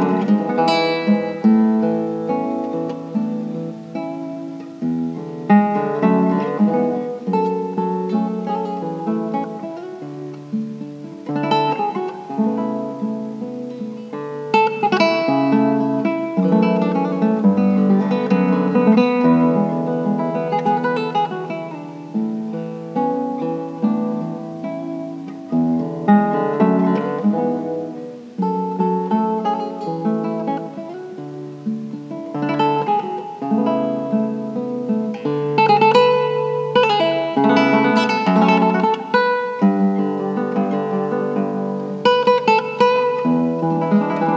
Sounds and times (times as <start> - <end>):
Acoustic guitar: 0.0 - 44.3.